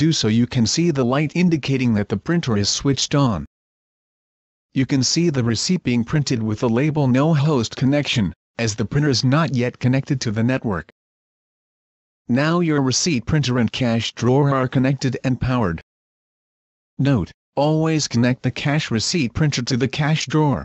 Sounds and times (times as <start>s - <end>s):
Speech: 0.0s - 3.5s, 4.7s - 11.0s, 12.3s - 15.9s, 17.0s - 20.6s.